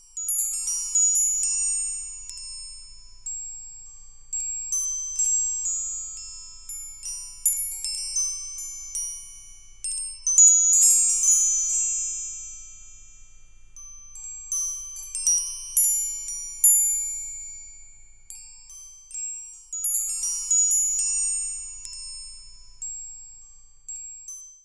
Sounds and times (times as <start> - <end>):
Wind chime: 0.0 - 24.6.